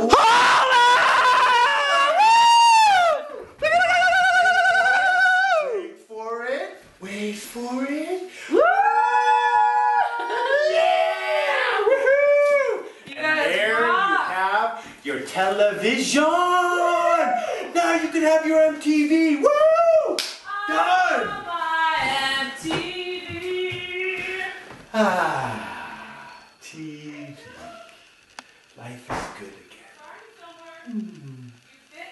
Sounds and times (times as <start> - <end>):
Clapping: 20.2 - 20.4.